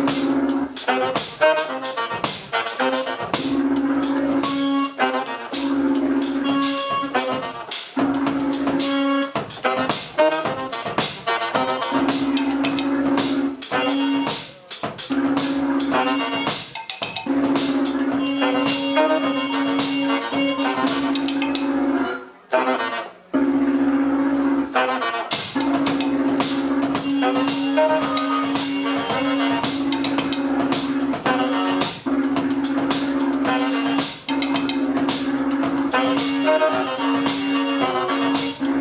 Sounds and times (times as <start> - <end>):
Drum: 0.0 - 22.0, 23.4 - 38.8
Drum kit: 0.0 - 22.1, 23.4 - 38.8
Inside, large room or hall: 0.0 - 38.8.